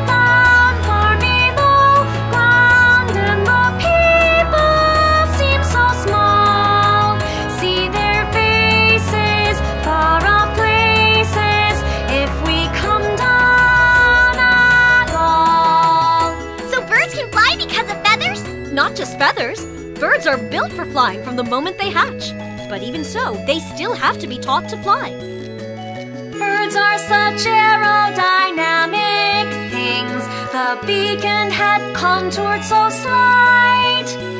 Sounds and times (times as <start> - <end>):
Music for children: 0.0 - 34.4
Child speech, kid speaking: 16.7 - 25.2.